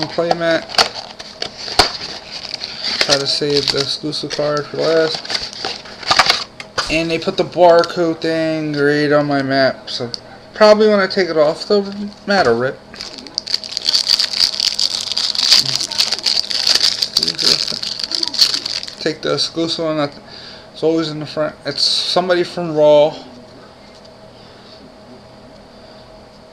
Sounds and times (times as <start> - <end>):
Speech: 6.8 - 13.4, 20.8 - 23.7.